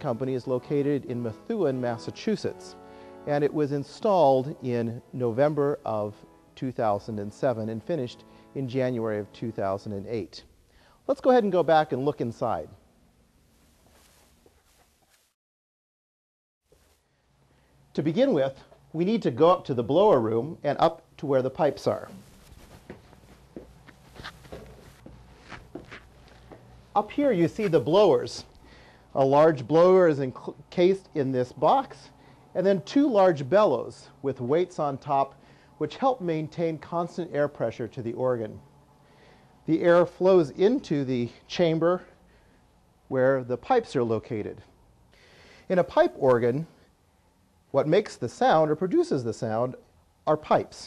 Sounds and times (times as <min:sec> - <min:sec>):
Speech: 0:00.0 - 0:10.5, 0:11.1 - 0:12.8, 0:17.9 - 0:22.2, 0:27.0 - 0:28.5, 0:29.1 - 0:38.6, 0:39.7 - 0:42.2, 0:43.1 - 0:44.7, 0:45.7 - 0:46.7, 0:47.7 - 0:50.8.